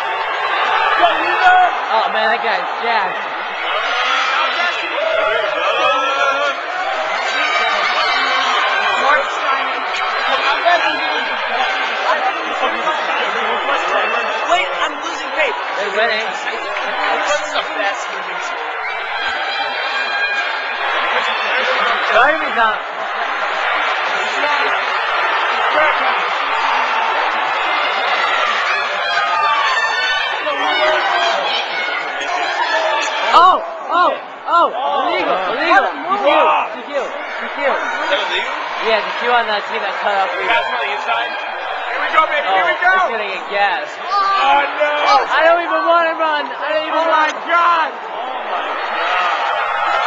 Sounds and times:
Inside, large room or hall: 0.0 - 50.0.

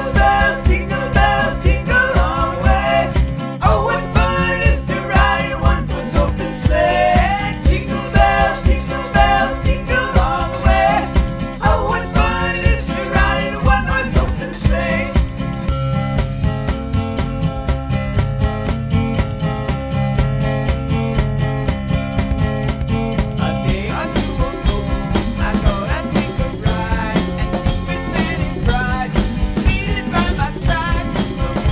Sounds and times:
Jingle, tinkle: 0.0 - 31.7.

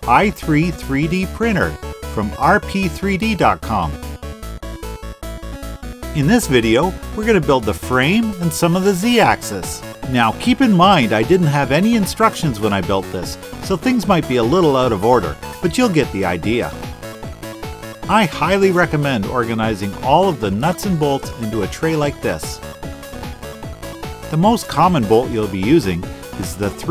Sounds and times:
Speech: 0.0 - 4.0, 6.2 - 16.7, 18.1 - 22.6, 24.3 - 26.9
Music: 0.0 - 26.9.

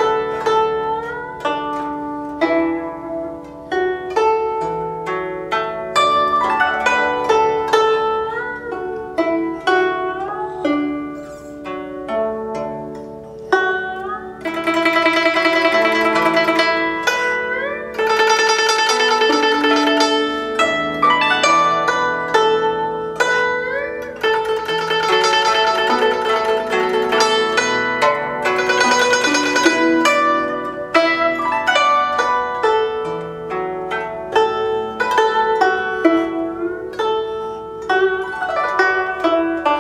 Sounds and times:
Music: 0.0 - 39.8.

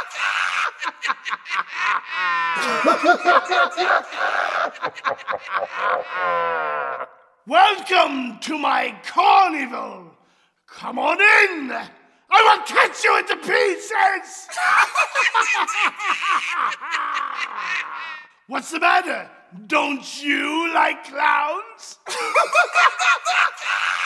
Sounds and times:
Speech: 7.5 - 15.7, 18.5 - 23.7.

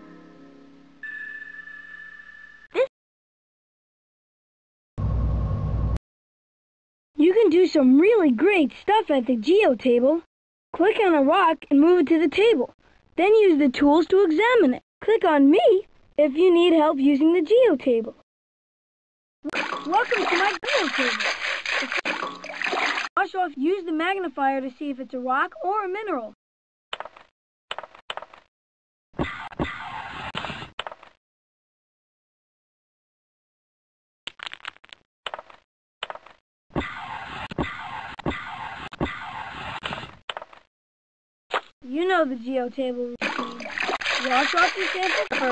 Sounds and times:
Speech: 7.2 - 18.2, 19.8 - 21.3, 23.2 - 26.4, 41.8 - 43.6, 44.2 - 45.5.

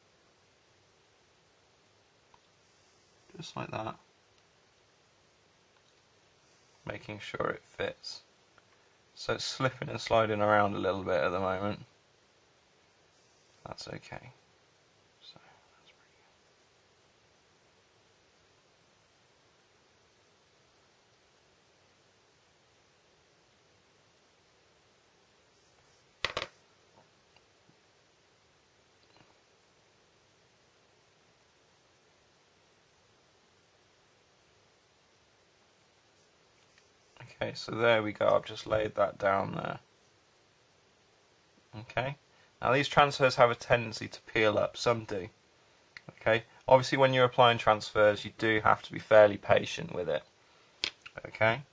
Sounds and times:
Silence: 0.0 - 7.2, 11.9 - 42.6
Inside, small room: 0.0 - 51.7.

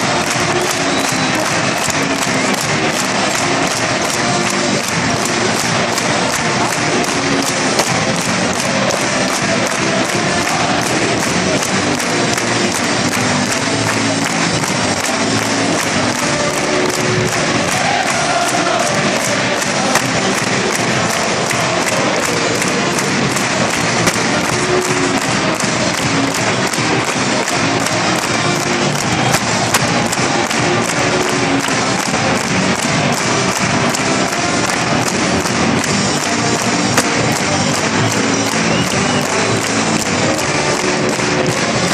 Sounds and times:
Music: 0.0 - 41.9.

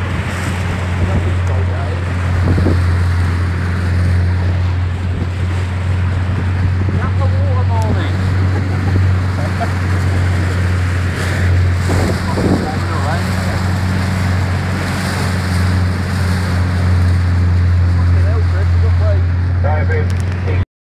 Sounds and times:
Motorboat, speedboat: 0.0 - 20.6
Speech: 1.0 - 2.0, 6.9 - 8.2, 12.0 - 13.6, 18.0 - 20.6.

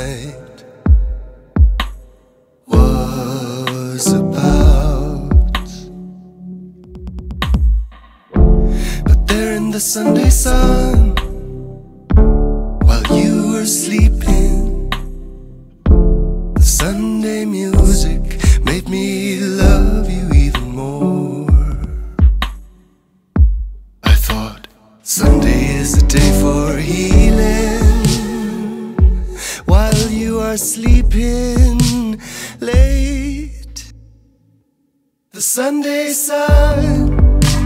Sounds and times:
Music: 0.2 - 33.8, 36.4 - 37.6.

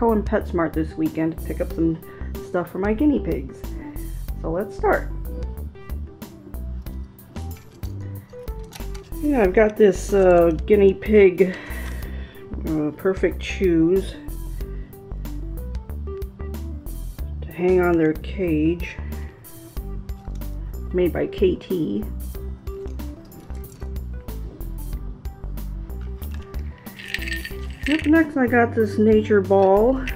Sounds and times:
Speech: 0.0 - 3.5, 4.4 - 5.1, 9.2 - 11.6, 12.6 - 14.2, 17.4 - 19.0, 20.9 - 22.1, 27.9 - 30.1
Music: 0.0 - 30.1.

